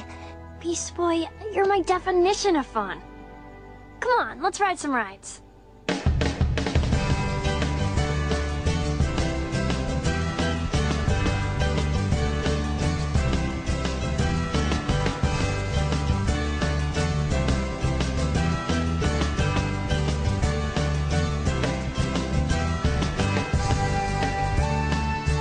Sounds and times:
Music: 0:00.0 - 0:25.4
Speech: 0:00.6 - 0:03.0, 0:04.0 - 0:05.4.

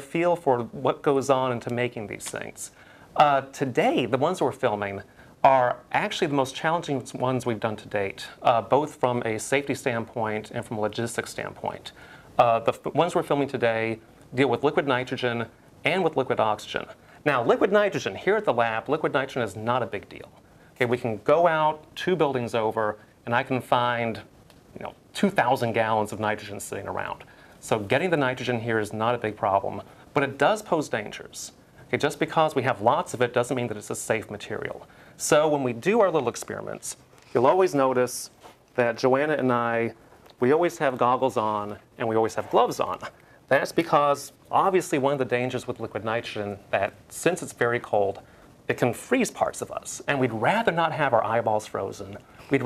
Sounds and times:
Speech: 0:00.0 - 0:52.6.

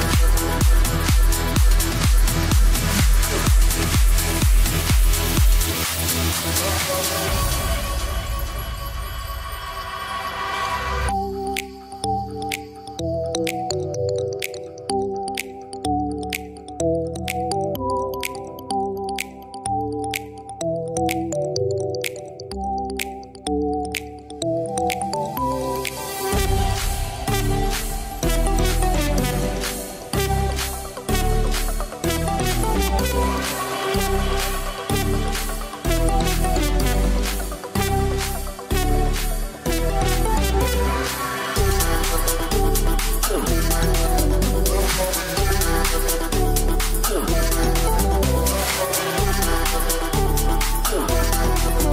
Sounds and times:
Soundtrack music: 0:00.0 - 0:51.9.

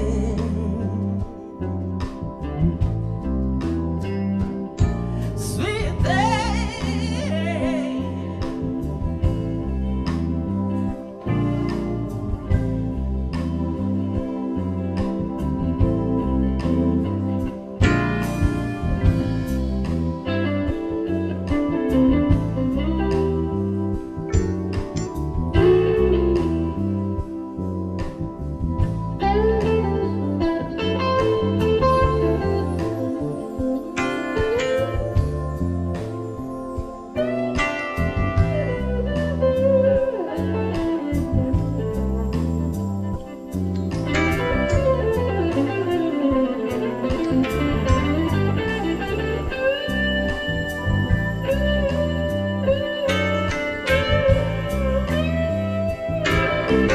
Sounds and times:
Music: 0:00.0 - 0:56.9.

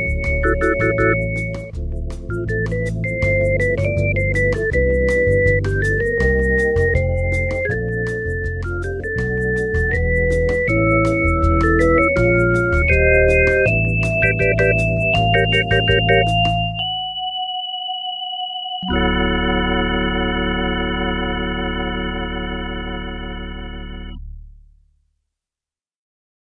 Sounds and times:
Music: 0:00.0 - 0:25.4.

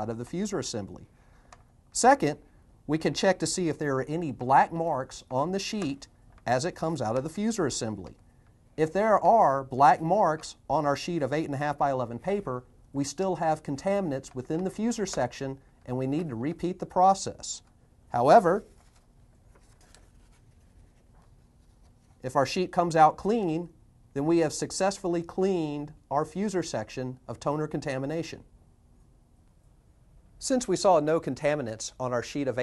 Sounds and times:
Speech: 0:00.0 - 0:01.1, 0:02.0 - 0:08.2, 0:08.8 - 0:18.7, 0:22.2 - 0:28.5, 0:30.4 - 0:32.6.

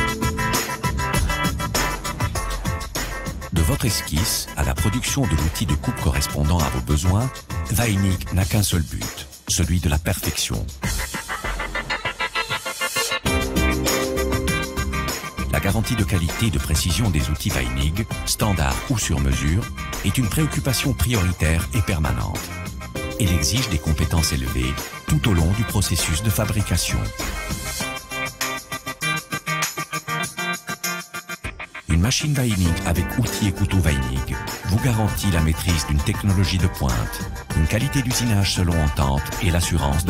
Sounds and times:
Music: 0:00.0 - 0:40.0
Speech: 0:03.5 - 0:10.8, 0:15.5 - 0:22.5, 0:23.1 - 0:27.2, 0:31.9 - 0:40.0.

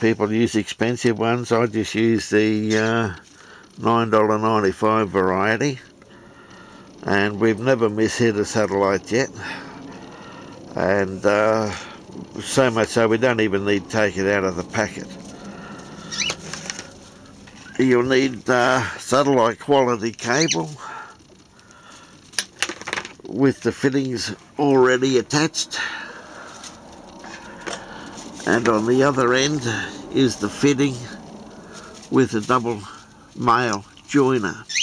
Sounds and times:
Bird vocalization, bird call, bird song: 0:15.8 - 0:16.5, 0:20.3 - 0:20.8.

